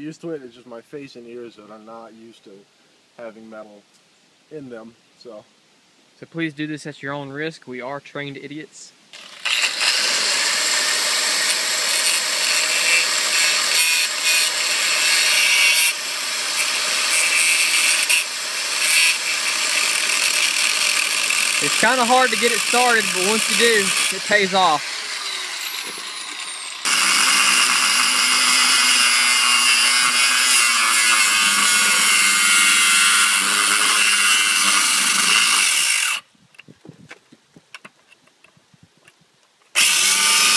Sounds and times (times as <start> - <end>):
Speech: 0.0 - 2.6, 3.2 - 3.8, 4.5 - 5.4, 6.2 - 9.0, 21.6 - 24.9.